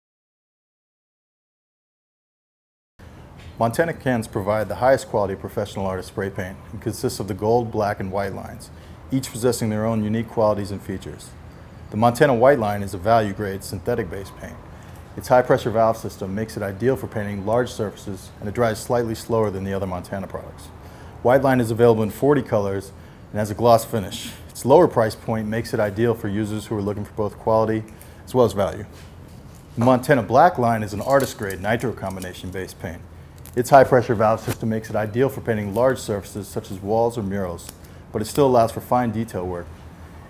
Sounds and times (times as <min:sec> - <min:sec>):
Speech: 0:03.6 - 0:29.0, 0:29.8 - 0:39.7.